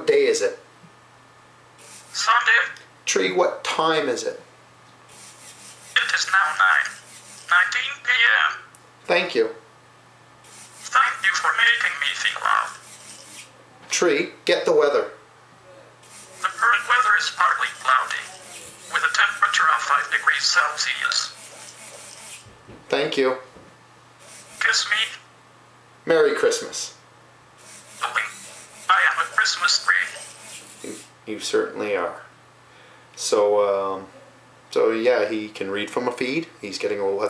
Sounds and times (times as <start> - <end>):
Male speech, man speaking: 0.0 - 0.6, 2.2 - 4.5, 6.0 - 9.6, 10.9 - 12.8, 13.9 - 15.2, 16.4 - 21.4, 22.9 - 23.5, 24.6 - 25.2, 26.1 - 27.0, 28.0 - 30.2, 30.8 - 32.3, 33.2 - 34.1, 34.7 - 37.3
Conversation: 0.3 - 37.3
Speech synthesizer: 2.2 - 2.8, 6.0 - 8.7, 10.9 - 12.8, 16.4 - 21.4, 24.6 - 25.2, 28.0 - 30.2.